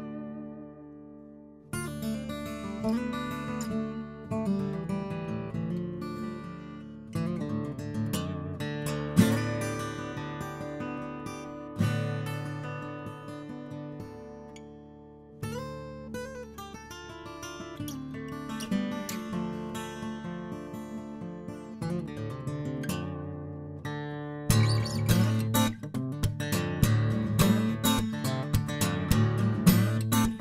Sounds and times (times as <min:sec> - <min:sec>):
Acoustic guitar: 0:00.0 - 0:30.4.